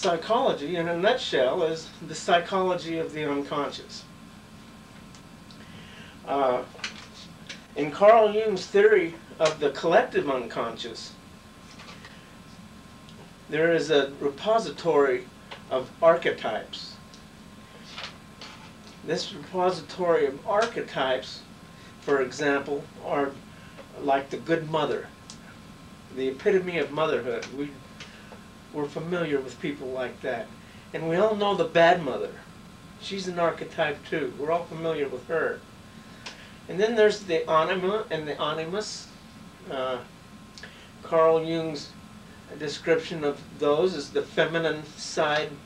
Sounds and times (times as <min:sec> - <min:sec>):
Speech: 0:00.0 - 0:04.1, 0:06.2 - 0:11.2, 0:13.5 - 0:17.0, 0:19.0 - 0:25.2, 0:26.1 - 0:27.8, 0:28.7 - 0:35.6, 0:36.7 - 0:40.1, 0:41.0 - 0:45.6.